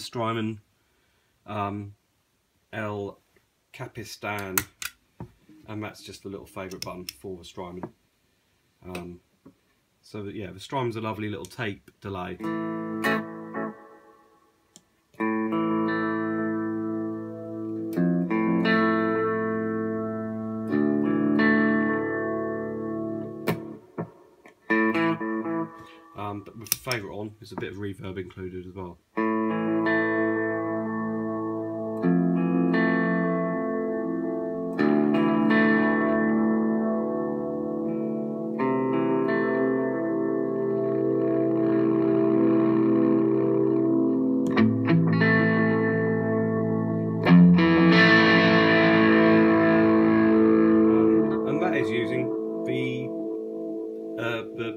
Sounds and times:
Speech: 0.0 - 0.6, 1.5 - 2.0, 2.7 - 4.7, 5.6 - 7.9, 8.8 - 9.2, 10.0 - 12.5, 26.2 - 29.0, 50.9 - 53.1, 54.2 - 54.7
Inside, small room: 0.0 - 54.7
Effects unit: 10.9 - 27.8, 28.4 - 54.7
Guitar: 10.9 - 54.7
Electronic tuner: 12.2 - 27.7, 29.0 - 54.7.

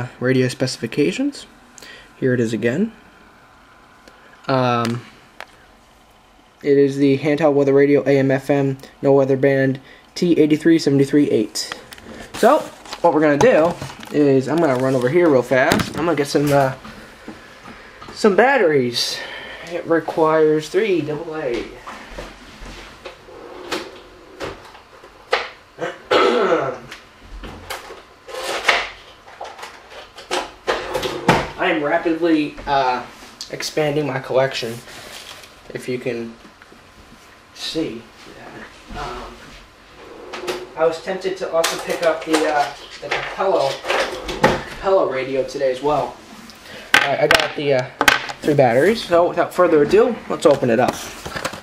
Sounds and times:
Speech: 0.0 - 1.5, 2.2 - 3.0, 4.5 - 5.0, 6.6 - 11.8, 12.4 - 16.8, 18.2 - 21.8, 31.5 - 34.9, 35.7 - 36.4, 37.6 - 39.4, 40.8 - 44.0, 44.8 - 46.2, 47.0 - 51.1.

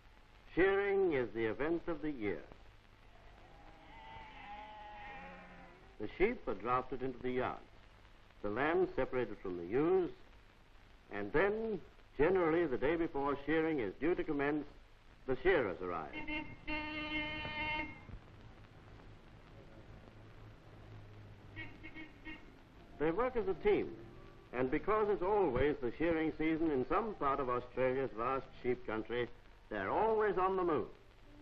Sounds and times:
Speech: 0.5 - 2.6, 6.0 - 7.7, 8.4 - 10.2, 11.1 - 16.2, 23.0 - 31.0.

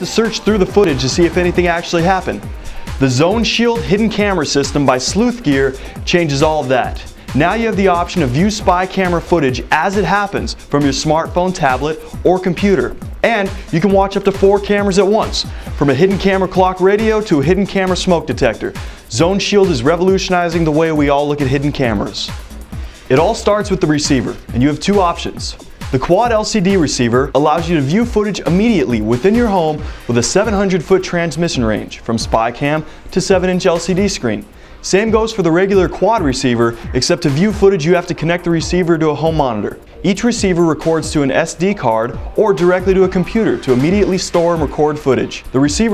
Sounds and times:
Speech: 0.0 - 2.4, 3.0 - 22.4, 23.1 - 45.9
Music: 0.0 - 45.9.

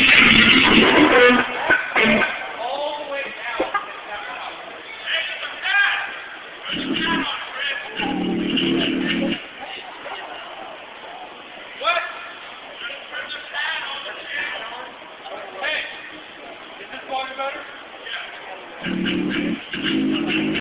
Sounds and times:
Speech: 2.0 - 18.9
Music: 19.1 - 20.6.

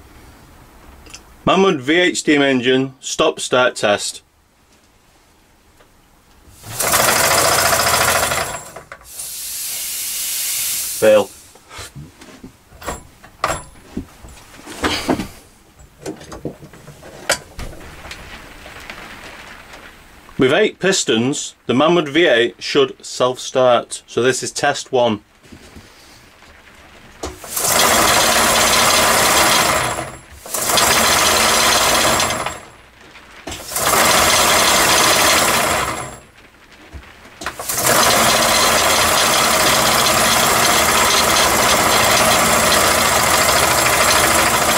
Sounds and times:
Speech: 1.4 - 4.3, 11.0 - 11.4, 20.4 - 25.3.

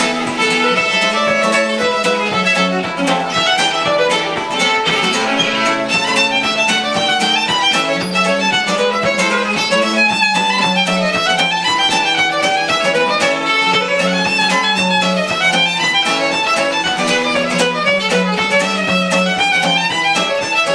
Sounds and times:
Guitar: 0.0 - 20.7
String section: 0.0 - 20.7.

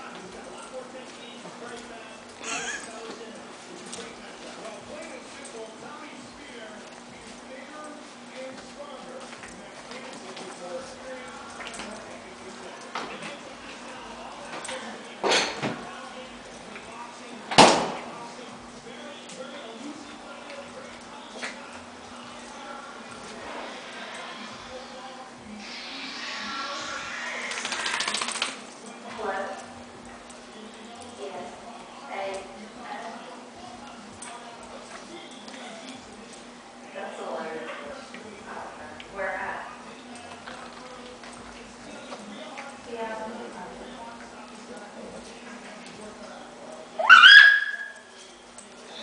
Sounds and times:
Speech: 0.0 - 28.1, 30.5 - 47.1.

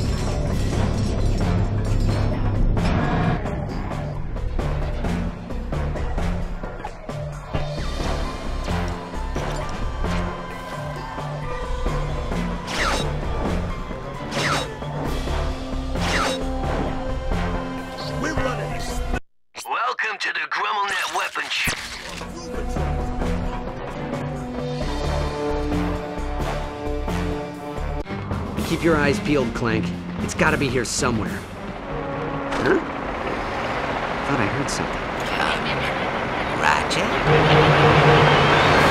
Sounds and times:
Music: 0.0 - 19.2, 22.0 - 33.3, 37.2 - 38.9.

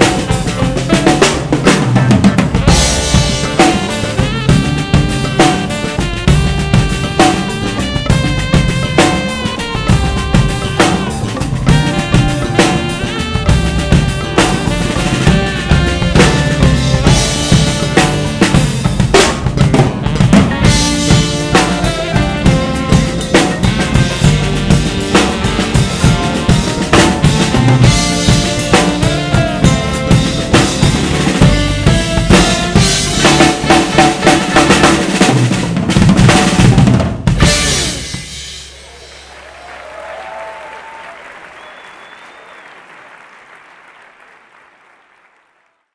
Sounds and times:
Bass drum: 0.0 - 39.2
Snare drum: 0.0 - 39.4
Drum kit: 0.0 - 41.1.

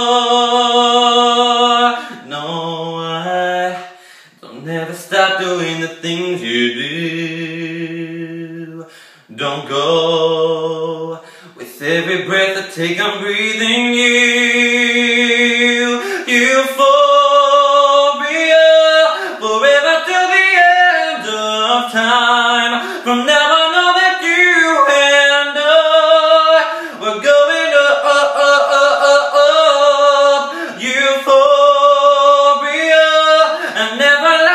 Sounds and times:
Male singing: 0.0 - 34.5.

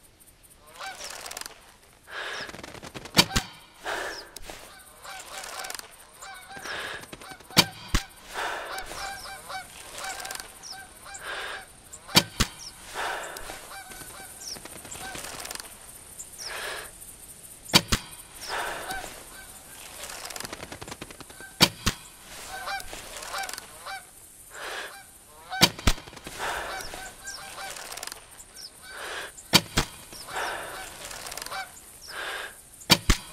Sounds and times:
Honk: 0.6 - 1.5, 3.2 - 14.4, 21.4 - 28.2, 28.8 - 32.4.

